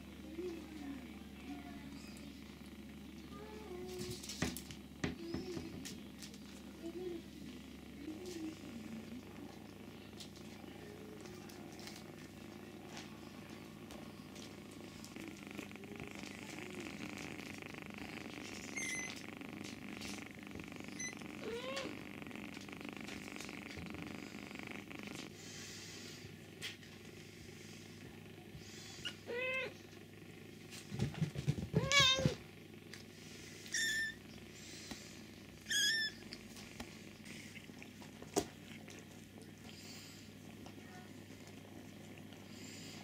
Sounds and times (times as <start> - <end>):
Inside, small room: 0.0 - 43.0
Cat: 8.0 - 26.2, 28.6 - 29.9, 31.0 - 32.4, 33.5 - 43.0.